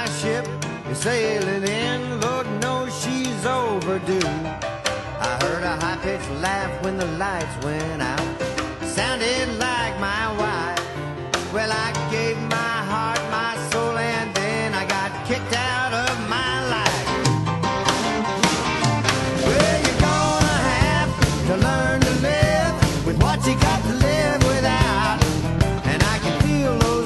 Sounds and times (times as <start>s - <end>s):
Rock and roll: 0.0s - 27.0s.